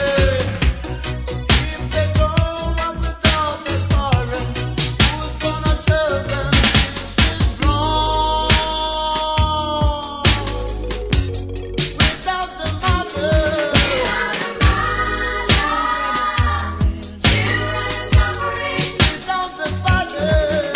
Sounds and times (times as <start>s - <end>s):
Music: 0.0s - 20.7s.